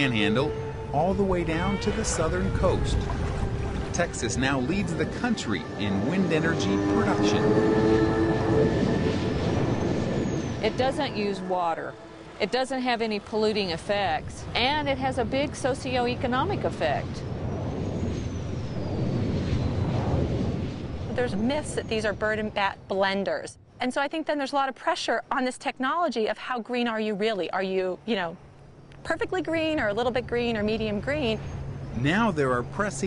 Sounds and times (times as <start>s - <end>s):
Music: 0.0s - 13.8s
Speech: 10.6s - 17.2s, 21.2s - 28.4s, 32.0s - 33.0s.